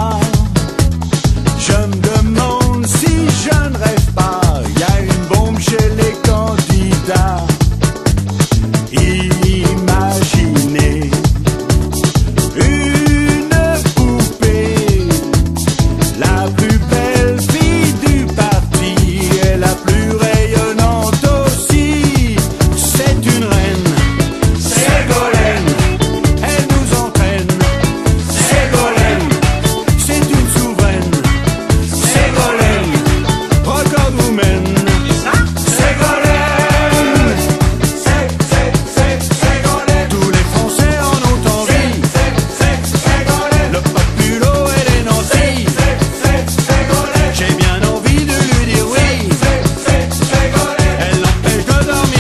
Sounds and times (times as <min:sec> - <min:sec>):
Music: 0:00.0 - 0:52.2.